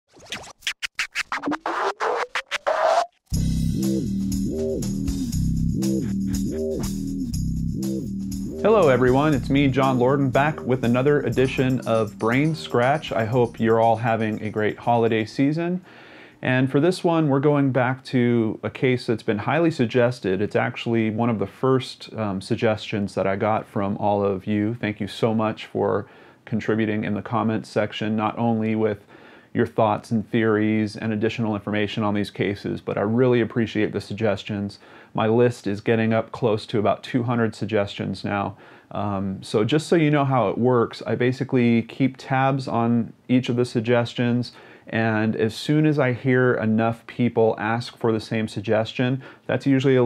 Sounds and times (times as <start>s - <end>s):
Music: 3.3s - 15.1s
Inside, small room: 7.7s - 50.0s
Speech: 8.6s - 15.8s, 16.4s - 50.0s.